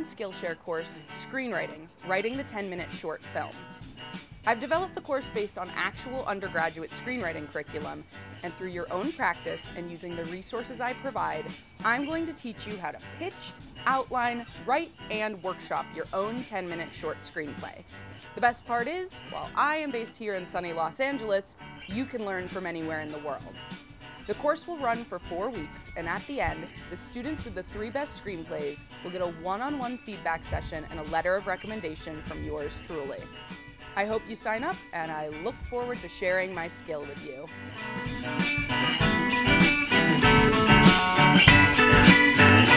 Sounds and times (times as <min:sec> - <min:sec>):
Speech: 0:00.0 - 0:03.6, 0:04.5 - 0:17.8, 0:18.4 - 0:23.6, 0:24.3 - 0:33.3, 0:34.0 - 0:37.5
Music: 0:00.0 - 0:42.7.